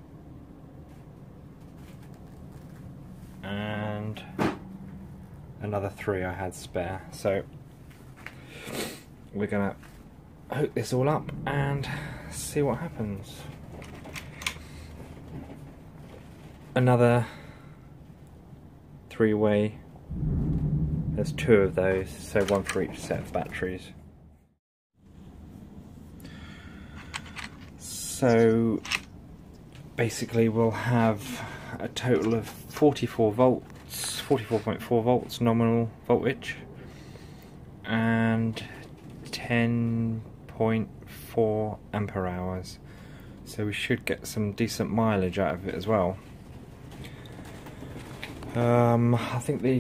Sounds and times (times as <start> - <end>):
Speech: 3.4 - 4.4, 5.6 - 7.5, 9.3 - 9.9, 10.5 - 13.6, 16.8 - 17.4, 19.1 - 19.8, 21.2 - 24.0, 27.8 - 28.9, 30.0 - 36.7, 37.9 - 42.8, 43.5 - 46.3, 48.5 - 49.8.